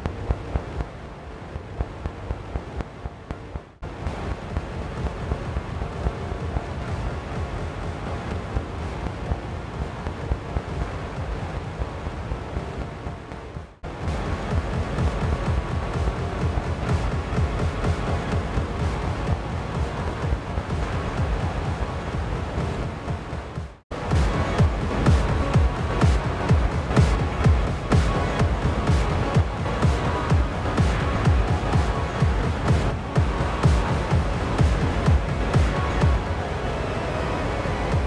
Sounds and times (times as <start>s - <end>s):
Music: 0.0s - 38.0s.